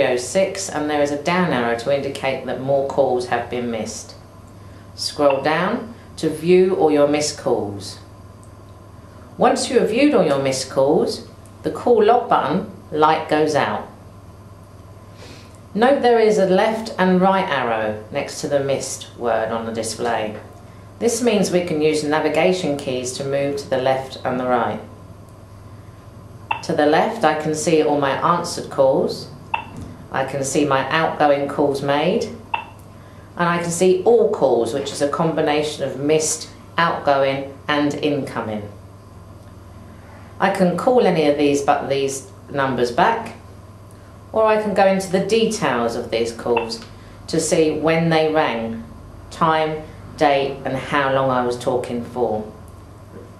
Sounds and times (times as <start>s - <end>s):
Speech: 0.0s - 4.2s, 5.0s - 8.1s, 9.4s - 14.0s, 15.8s - 24.9s, 26.5s - 29.4s, 30.1s - 32.4s, 33.4s - 38.8s, 40.4s - 43.4s, 44.4s - 52.6s.